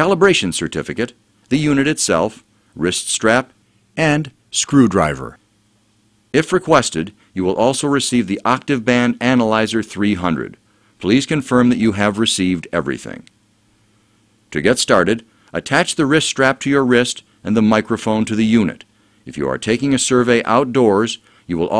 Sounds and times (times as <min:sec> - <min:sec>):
Speech: 0:00.0 - 0:05.4, 0:06.4 - 0:13.3, 0:14.5 - 0:21.7.